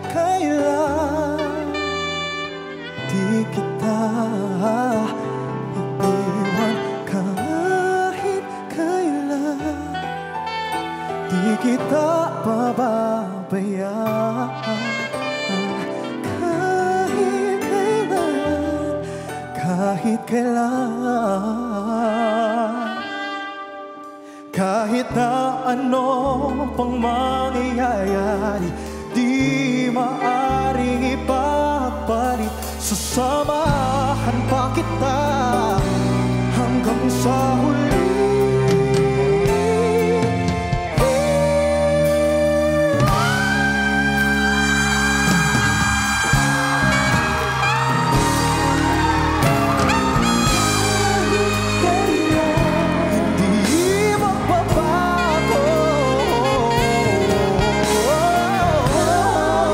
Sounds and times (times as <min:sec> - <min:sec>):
Music: 0:00.0 - 0:59.7.